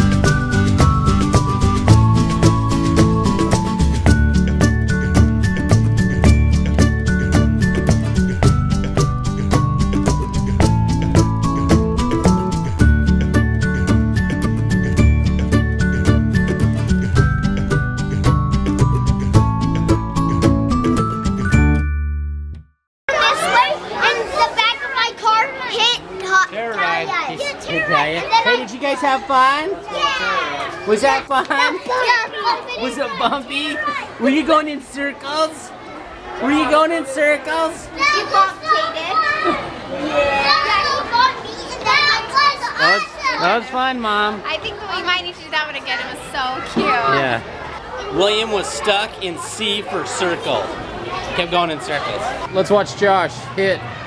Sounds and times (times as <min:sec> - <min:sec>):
Outside, urban or manmade: 0:00.0 - 0:54.0
Child speech, kid speaking: 0:23.1 - 0:34.3, 0:37.6 - 0:43.8, 0:44.4 - 0:52.5
Children playing: 0:23.1 - 0:54.0.